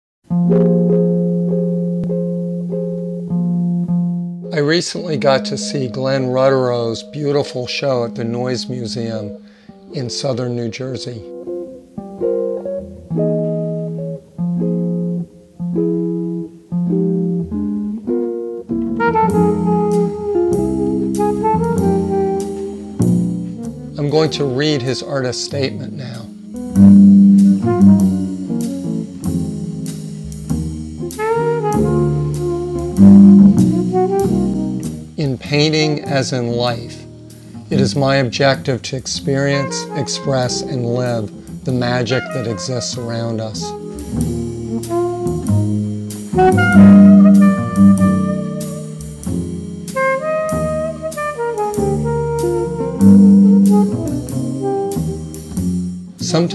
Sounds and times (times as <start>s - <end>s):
Music: 0.2s - 56.5s
Speech: 4.5s - 11.3s, 24.0s - 26.3s, 35.2s - 37.1s, 37.7s - 43.8s, 56.2s - 56.5s.